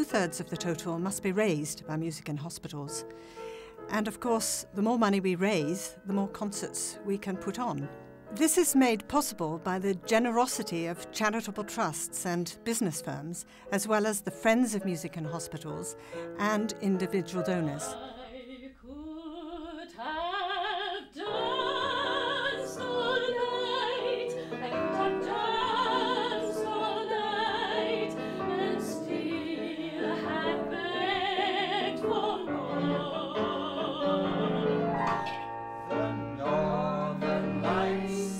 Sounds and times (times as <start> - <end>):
A capella: 16.4 - 35.0, 36.0 - 38.3.